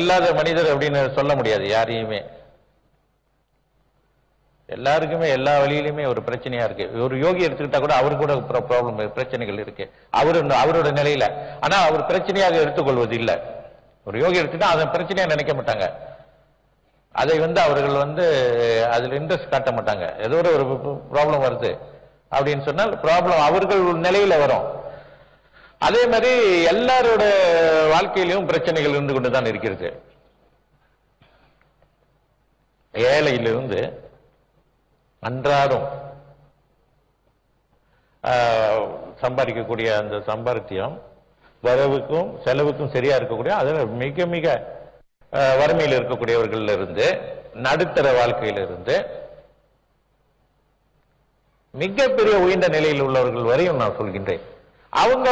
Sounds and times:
Male speech, man speaking: 0.0 - 2.3, 4.7 - 13.5, 14.1 - 16.0, 17.2 - 24.8, 25.8 - 30.0, 33.0 - 34.0, 35.2 - 36.0, 38.2 - 44.7, 45.3 - 49.2, 51.8 - 55.3
Narration, monologue: 0.0 - 55.3.

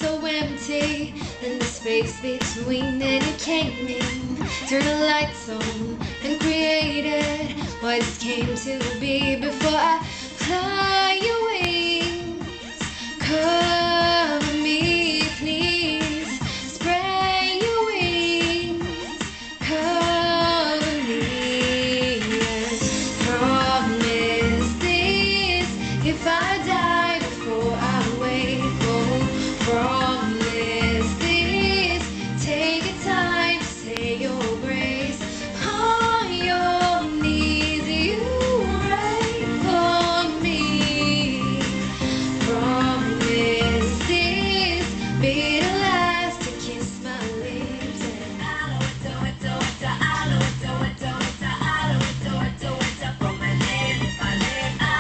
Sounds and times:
Female singing: 0.0 - 55.0
Music: 0.0 - 55.0.

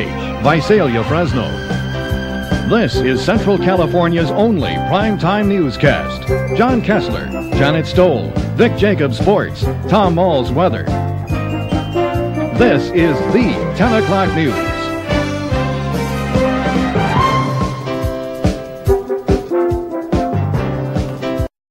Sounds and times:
Speech: 0.0 - 1.6, 2.7 - 11.0, 12.6 - 14.9
Music: 0.0 - 21.5.

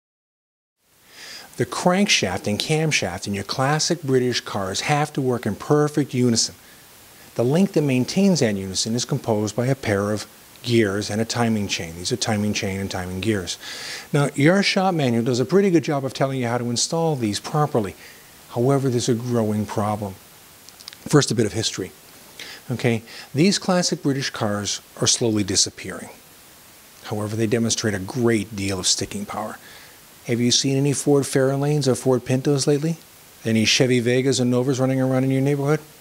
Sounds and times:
Speech: 1.6 - 6.6, 7.4 - 20.2, 21.0 - 22.0, 22.7 - 26.2, 27.0 - 29.6, 30.2 - 35.9.

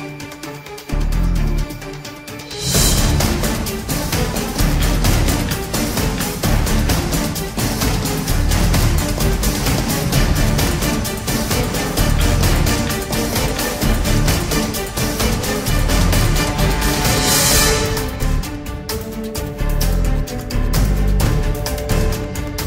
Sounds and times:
Music: 0.0 - 22.6.

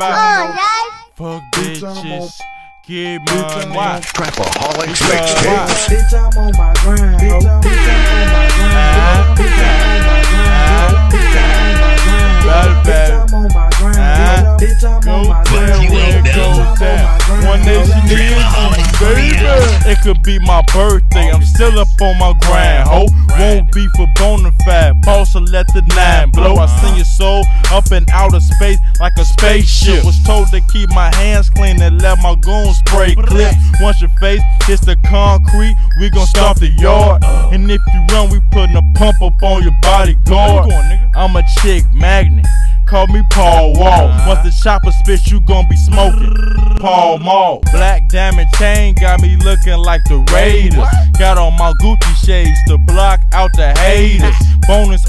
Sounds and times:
Music: 0.0 - 46.9, 47.6 - 55.0.

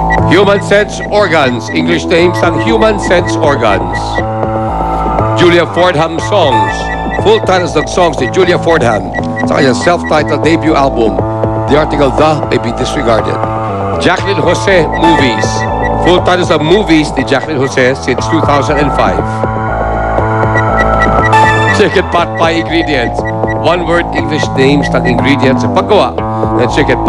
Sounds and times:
Music: 0.0 - 27.0
Speech: 0.3 - 4.2, 5.4 - 13.4, 14.0 - 19.4, 21.7 - 27.0.

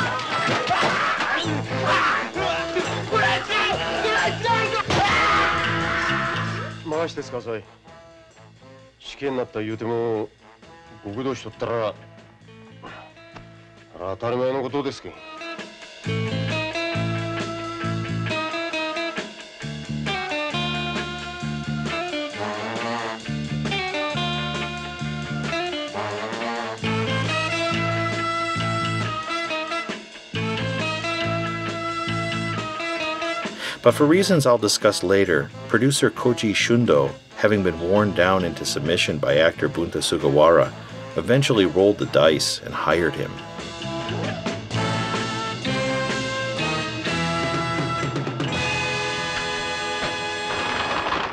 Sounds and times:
Music: 0.0 - 51.3
Speech: 6.8 - 7.7, 9.0 - 10.3, 11.0 - 12.0, 14.0 - 15.2, 33.8 - 43.4.

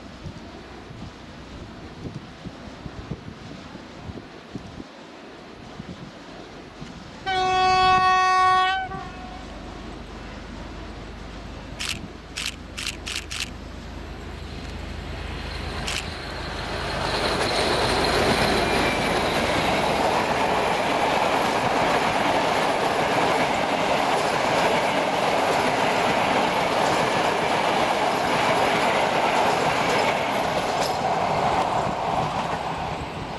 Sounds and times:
Railroad car, train wagon: 0.0 - 33.3
Train: 0.0 - 33.3
Clickety-clack: 17.0 - 32.7.

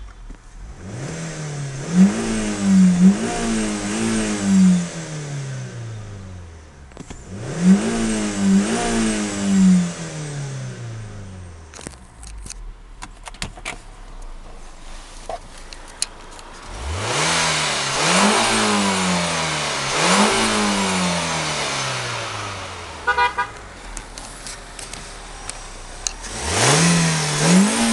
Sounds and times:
Car: 0.0 - 27.9.

